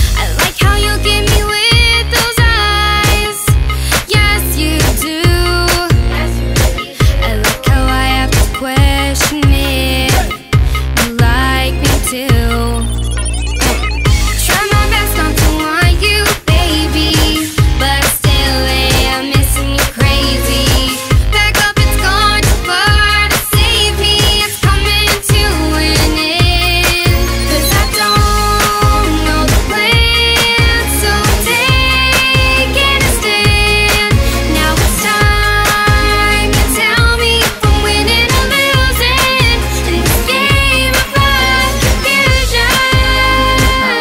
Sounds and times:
Music: 0.0 - 44.0.

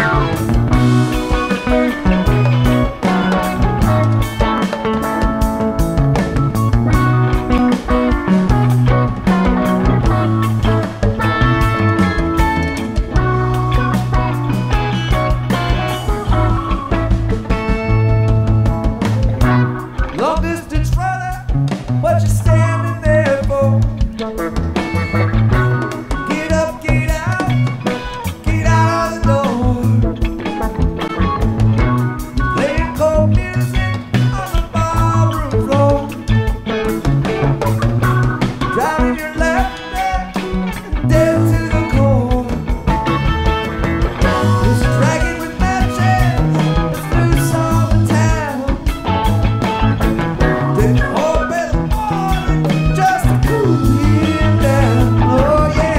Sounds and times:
Music: 0.0 - 55.9.

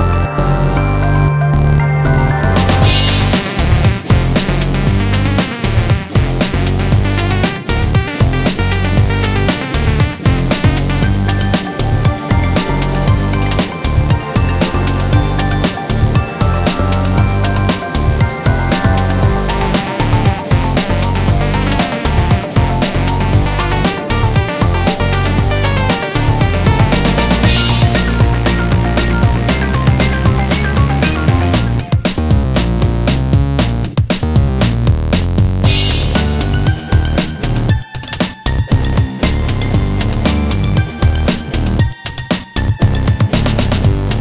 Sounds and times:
Video game music: 0.0 - 35.0, 35.6 - 44.2.

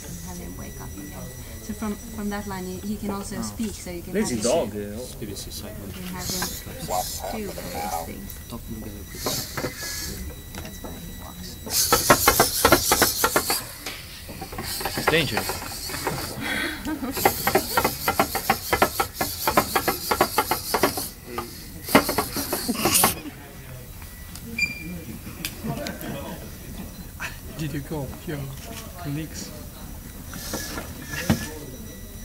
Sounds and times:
Speech: 0.0 - 9.5.

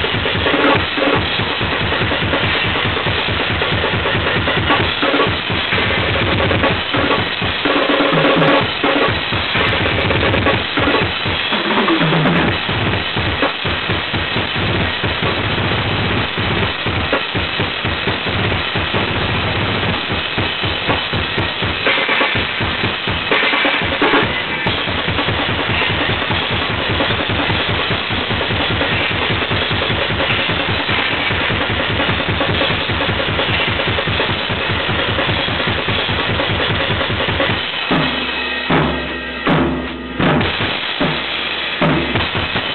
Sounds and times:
Music: 0.0 - 42.7.

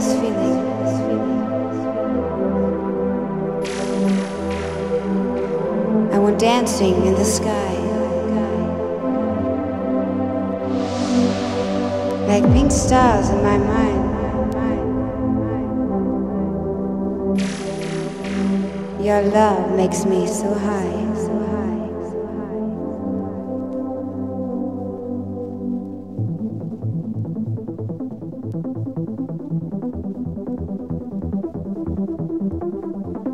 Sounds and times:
Speech: 0.0 - 1.6, 6.1 - 8.7, 12.2 - 16.6, 19.0 - 22.6
Music: 0.0 - 33.3.

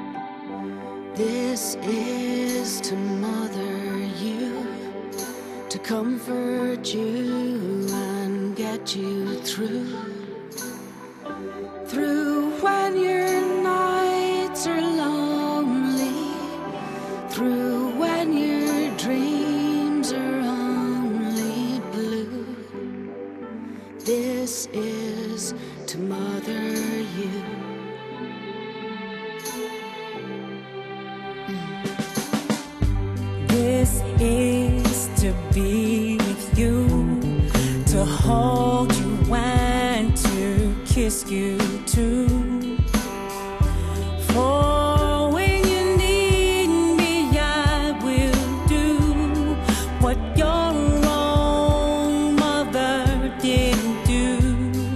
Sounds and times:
Christian music: 0.0 - 54.9.

